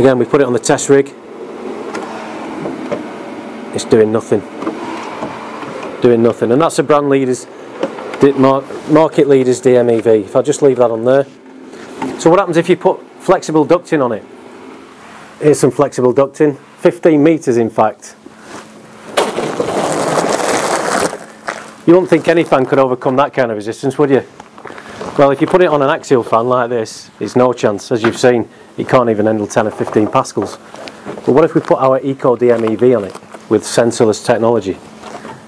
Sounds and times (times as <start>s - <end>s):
Speech: 0.0s - 1.2s, 3.7s - 4.5s, 6.0s - 7.5s, 8.2s - 11.4s, 12.2s - 14.3s, 15.4s - 18.2s, 21.9s - 24.3s, 25.2s - 30.6s, 31.2s - 34.8s.